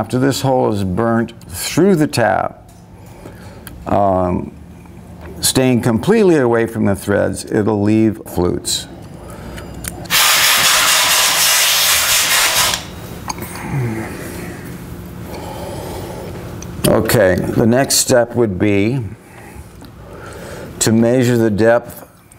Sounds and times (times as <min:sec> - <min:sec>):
Speech: 0:00.0 - 0:02.6, 0:03.9 - 0:04.6, 0:05.4 - 0:08.9, 0:16.8 - 0:19.2, 0:20.8 - 0:22.1.